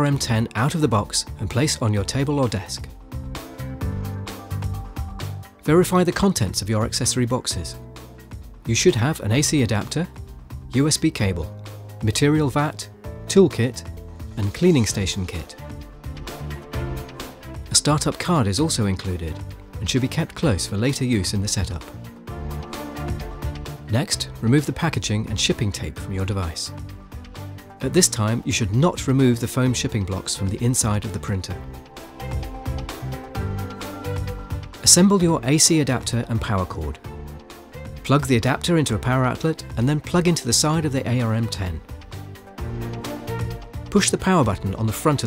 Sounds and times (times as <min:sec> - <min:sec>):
Speech: 0:00.0 - 0:02.9, 0:05.6 - 0:07.8, 0:08.7 - 0:10.1, 0:10.7 - 0:15.6, 0:17.7 - 0:21.9, 0:23.9 - 0:26.8, 0:27.8 - 0:31.6, 0:34.8 - 0:37.0, 0:38.0 - 0:41.8, 0:43.9 - 0:45.2
Music: 0:00.0 - 0:45.2.